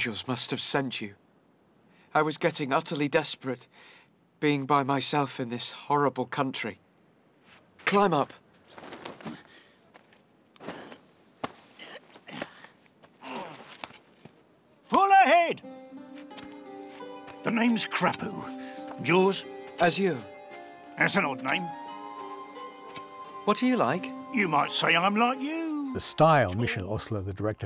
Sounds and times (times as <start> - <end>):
Music: 15.0 - 27.3.